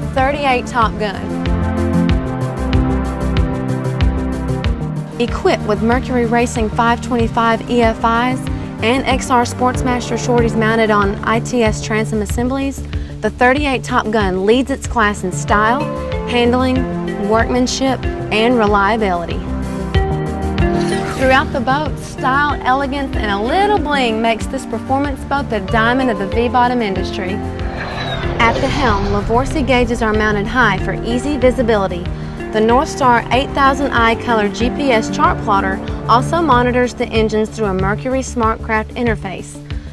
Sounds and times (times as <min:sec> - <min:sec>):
Music: 0:00.0 - 0:39.9
Speech: 0:00.2 - 0:01.3, 0:05.2 - 0:19.4, 0:21.2 - 0:27.4, 0:28.4 - 0:39.6.